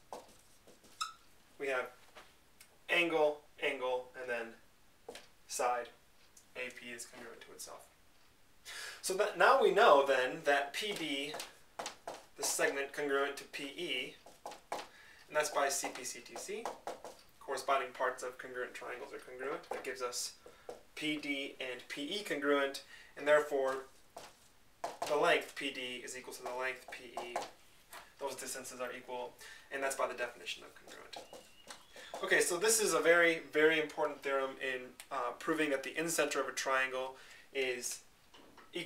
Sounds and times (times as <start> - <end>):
Speech: 1.6 - 2.0, 2.9 - 4.6, 5.5 - 6.0, 6.6 - 7.9, 9.0 - 11.4, 12.4 - 14.2, 15.3 - 16.7, 17.4 - 20.4, 21.0 - 23.9, 25.1 - 27.5, 28.2 - 31.3, 32.1 - 38.0.